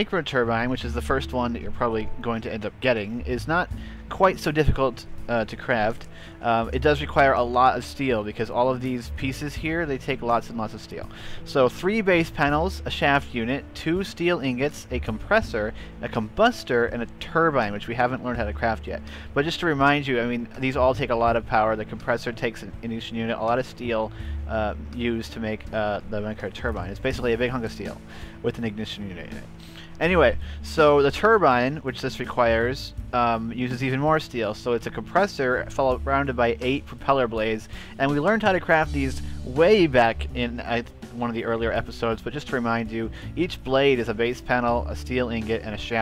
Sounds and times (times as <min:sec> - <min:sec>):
Music: 0:00.0 - 0:46.0
Speech: 0:00.0 - 0:46.0.